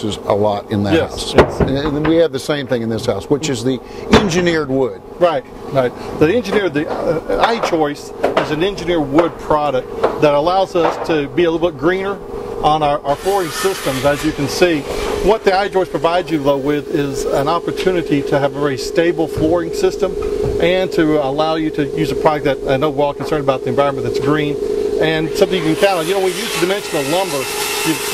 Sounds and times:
Speech: 0.0 - 28.1.

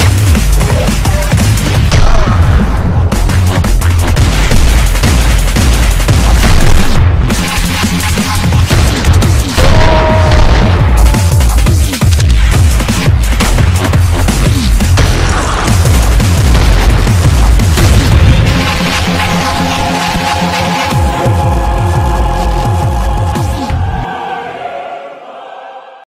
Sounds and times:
Music: 0.0 - 26.0.

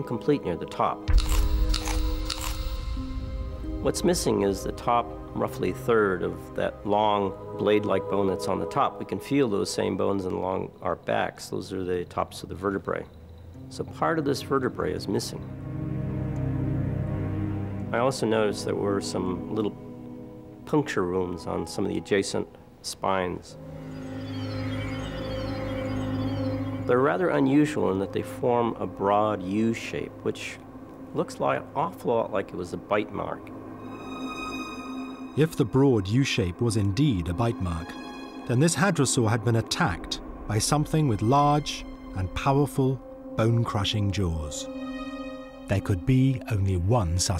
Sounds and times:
Speech: 0.0 - 1.1, 3.8 - 13.1, 13.7 - 15.4, 17.9 - 19.8, 20.7 - 23.6, 26.9 - 33.5, 35.4 - 44.7, 45.7 - 47.3
Music: 0.0 - 47.3.

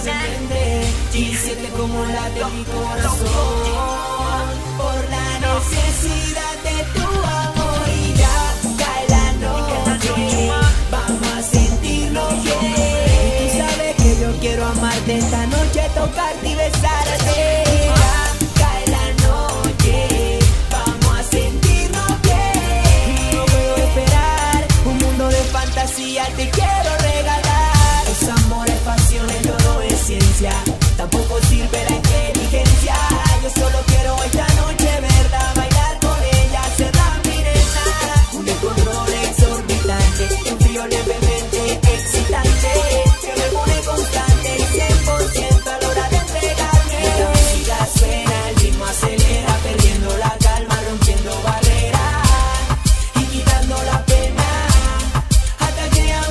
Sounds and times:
Funk: 0.0 - 56.3.

